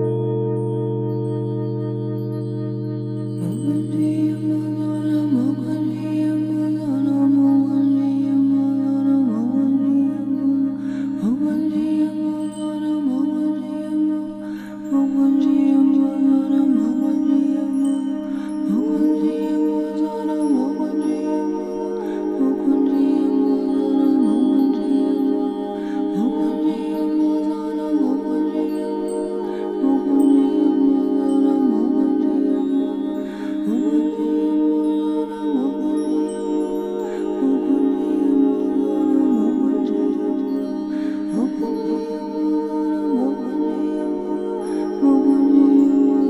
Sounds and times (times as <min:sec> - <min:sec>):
Mantra: 0:00.0 - 0:46.3.